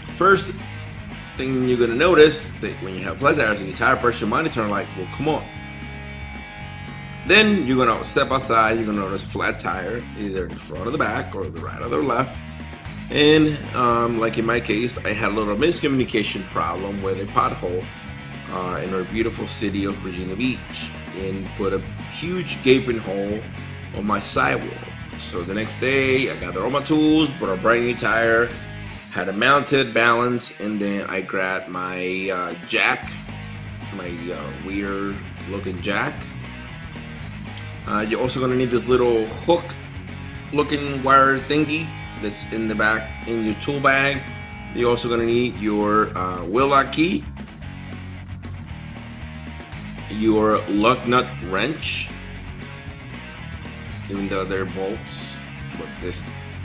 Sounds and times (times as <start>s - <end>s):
Music: 0.0s - 56.6s
Speech: 0.1s - 0.6s, 1.4s - 5.5s, 7.3s - 12.4s, 13.1s - 33.2s, 33.9s - 36.3s, 37.8s - 39.8s, 40.5s - 47.3s, 50.0s - 52.2s, 54.0s - 56.4s.